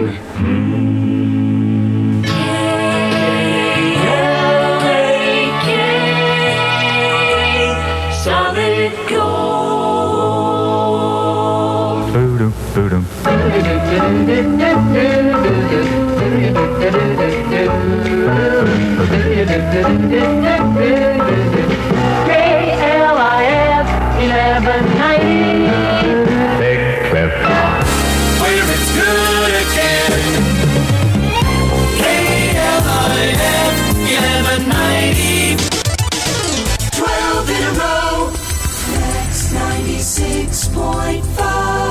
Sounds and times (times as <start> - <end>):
Music: 0.0 - 41.9
Radio: 12.0 - 14.0.